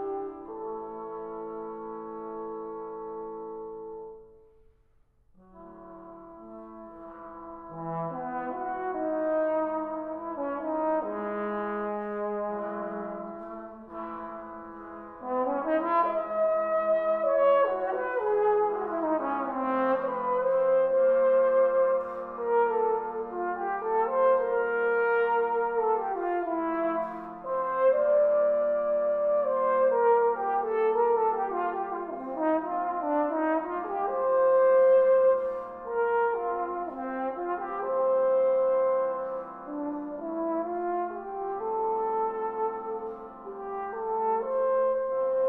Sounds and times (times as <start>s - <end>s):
Trombone: 0.0s - 4.3s, 5.4s - 45.4s.